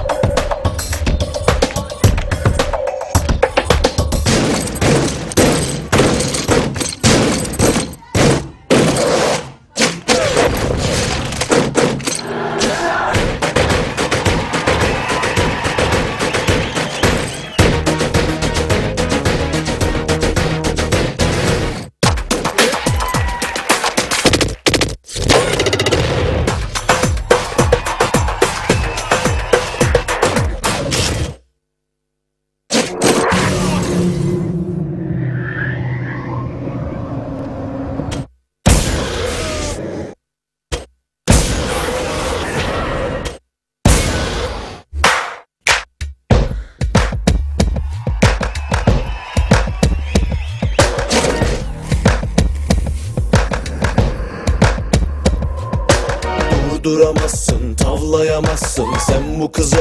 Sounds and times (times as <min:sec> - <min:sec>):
Music: 0:00.0 - 0:08.6, 0:12.7 - 0:31.4, 0:45.8 - 0:59.8.